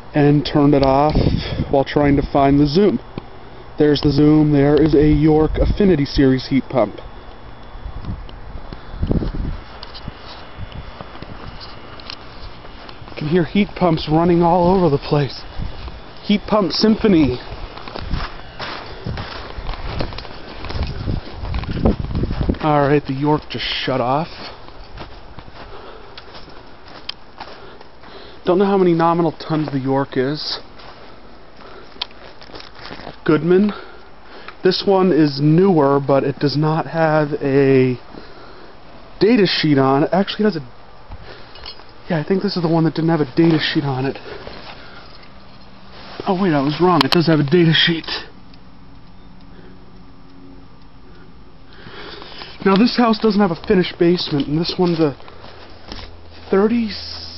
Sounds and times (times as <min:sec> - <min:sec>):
Speech: 0:00.1 - 0:03.0, 0:03.8 - 0:07.1, 0:13.2 - 0:15.5, 0:16.2 - 0:17.5, 0:22.6 - 0:24.4, 0:28.5 - 0:30.7, 0:33.2 - 0:33.9, 0:34.6 - 0:38.0, 0:39.2 - 0:40.7, 0:42.1 - 0:44.2, 0:46.2 - 0:48.4, 0:52.6 - 0:55.2, 0:56.5 - 0:57.3.